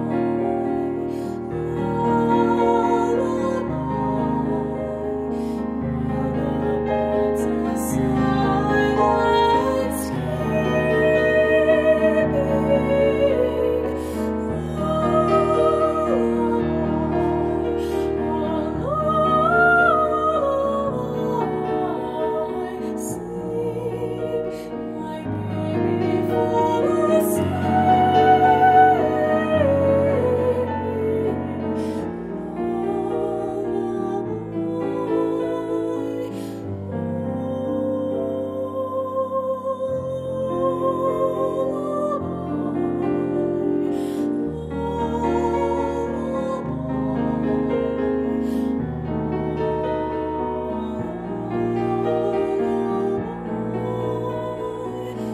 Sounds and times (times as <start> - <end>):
Music: 0.0 - 55.3.